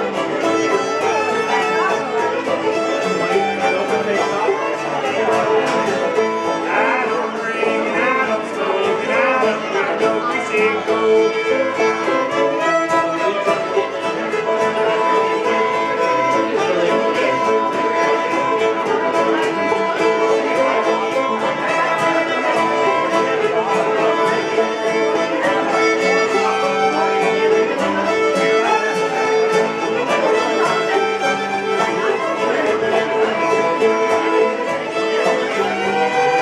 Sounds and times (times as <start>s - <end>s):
Pizzicato: 0.0s - 36.4s
Speech: 0.0s - 36.4s.